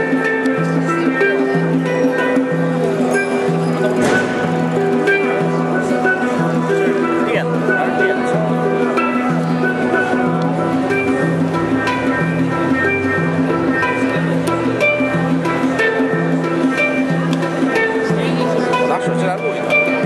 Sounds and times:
Music: 0.0 - 20.0
Speech: 0.1 - 4.7, 5.3 - 10.6, 17.1 - 20.0.

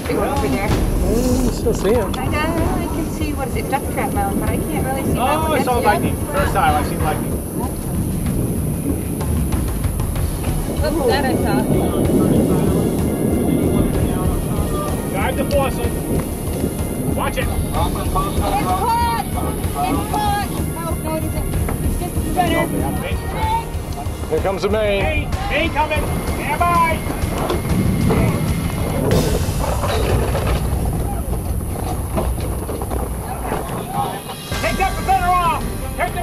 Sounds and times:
Thunder: 0.0 - 36.2.

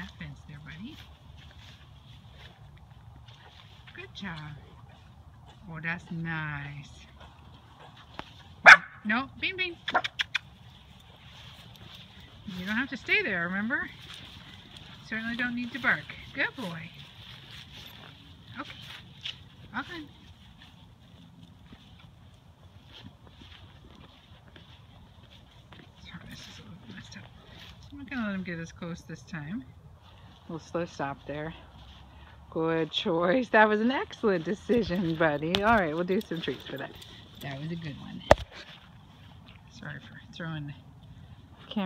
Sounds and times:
Speech: 15.0 - 16.9, 32.6 - 38.3.

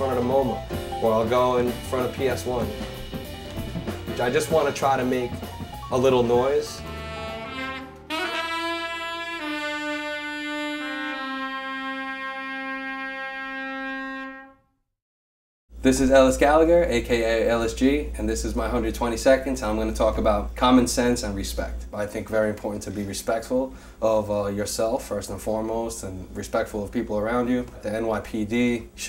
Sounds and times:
Brass instrument: 0.0 - 14.8
Saxophone: 6.6 - 14.7.

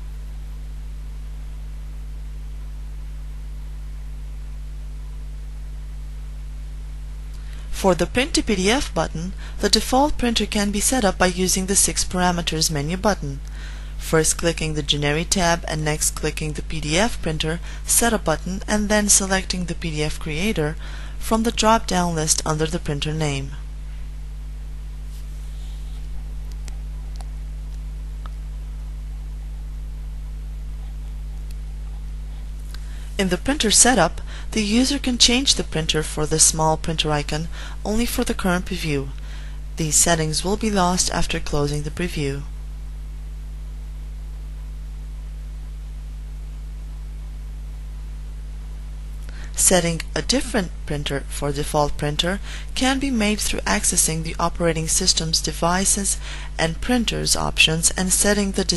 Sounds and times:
Speech: 7.7 - 13.4, 14.0 - 23.6, 33.2 - 39.2, 39.8 - 42.5, 49.6 - 58.7.

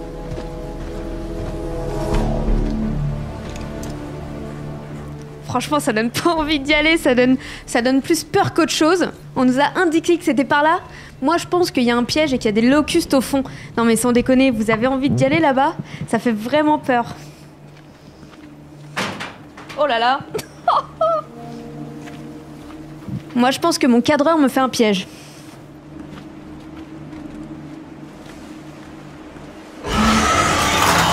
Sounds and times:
Music: 0.0 - 31.1
Speech: 5.5 - 17.2, 19.8 - 20.4, 23.4 - 25.1.

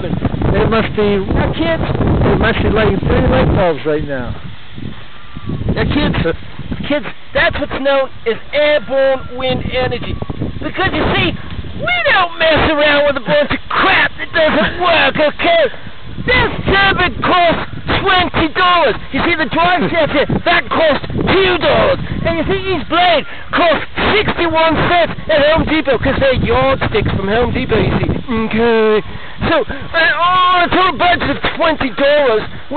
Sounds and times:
Wind noise (microphone): 0.0 - 32.7.

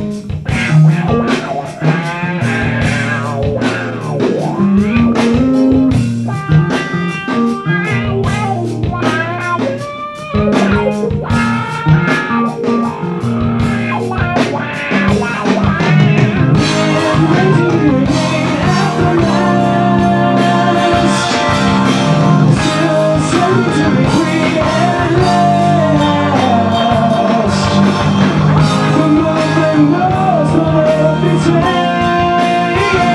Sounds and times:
Drum kit: 0.0 - 33.1
Guitar: 0.0 - 33.1
Heavy metal: 0.0 - 33.1
Progressive rock: 0.0 - 33.1.

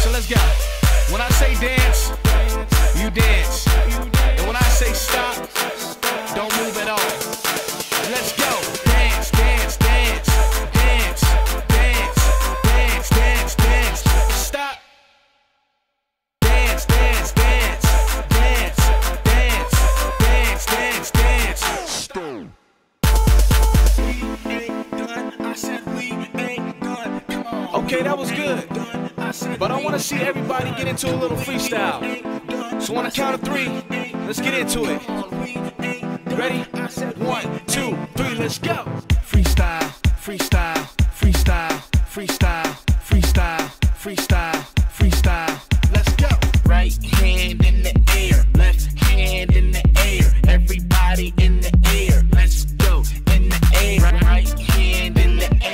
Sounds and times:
Singing: 0.0 - 14.8, 16.4 - 22.5, 23.1 - 55.7
Music: 0.0 - 15.6, 16.4 - 55.7.

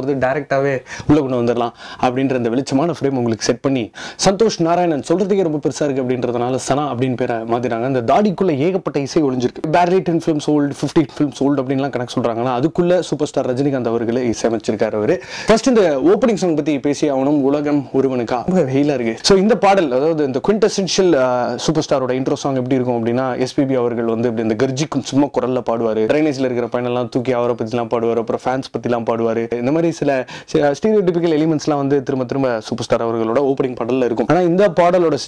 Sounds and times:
Speech: 0.0 - 35.2.

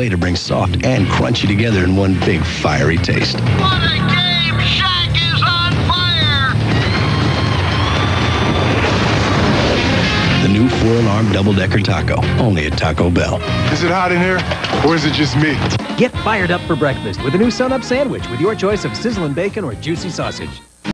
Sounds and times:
Speech: 0.0 - 6.5, 10.4 - 20.7
Music: 0.0 - 20.9.

